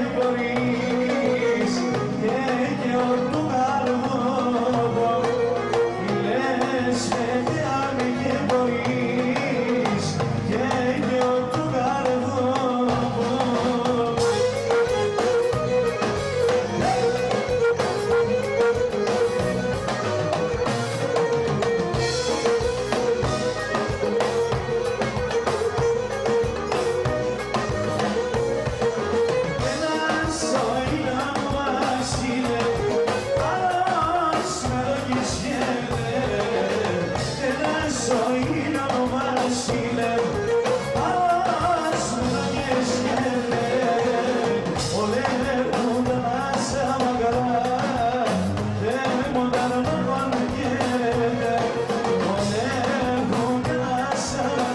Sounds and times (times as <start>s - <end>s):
Music: 0.0s - 54.7s.